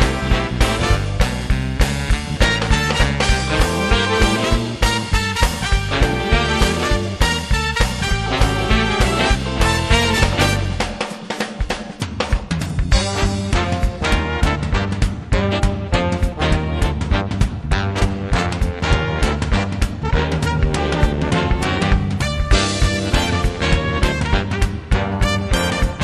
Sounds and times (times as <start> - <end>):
Music: 0.0 - 26.0.